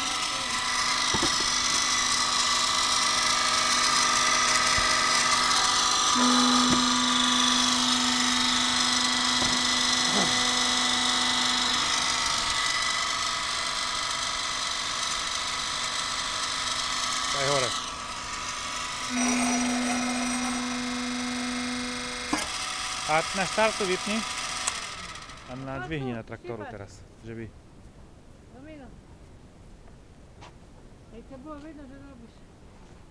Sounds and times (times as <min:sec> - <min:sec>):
Wood: 0:01.0 - 0:02.2, 0:04.3 - 0:11.8.